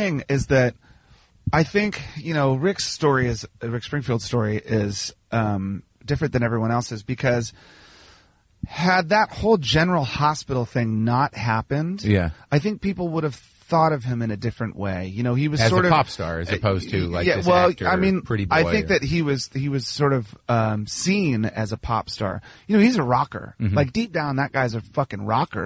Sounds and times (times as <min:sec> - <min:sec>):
Speech: 0:00.0 - 0:00.8, 0:01.5 - 0:07.5, 0:08.6 - 0:25.6.